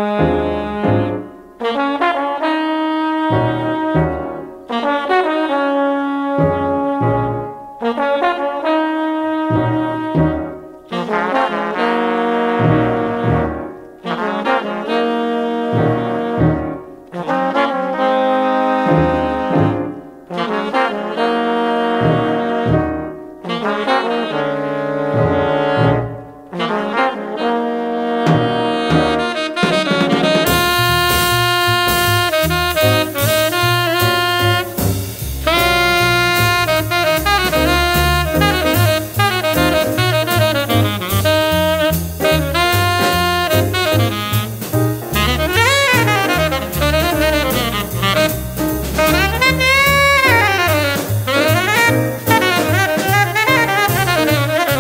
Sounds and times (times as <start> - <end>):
French horn: 0.0 - 54.8
Jazz: 0.0 - 54.8
Saxophone: 0.0 - 54.8
Trumpet: 0.0 - 54.8.